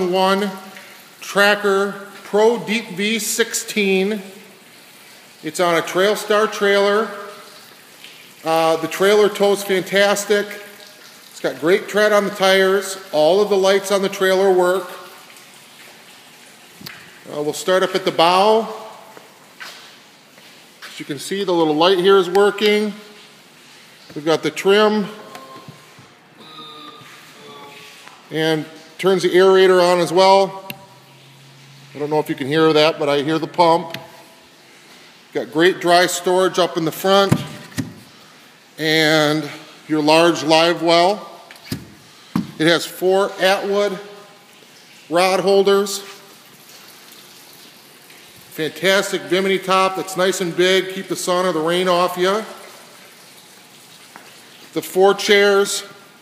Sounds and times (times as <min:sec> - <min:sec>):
Speech: 0:00.0 - 0:04.4, 0:05.4 - 0:07.4, 0:08.4 - 0:10.6, 0:11.4 - 0:15.0, 0:17.3 - 0:18.9, 0:20.9 - 0:23.1, 0:24.1 - 0:25.7, 0:26.4 - 0:30.6, 0:32.0 - 0:34.0, 0:35.3 - 0:37.5, 0:38.8 - 0:41.3, 0:42.6 - 0:44.1, 0:45.1 - 0:46.1, 0:48.5 - 0:52.6, 0:54.7 - 0:56.0.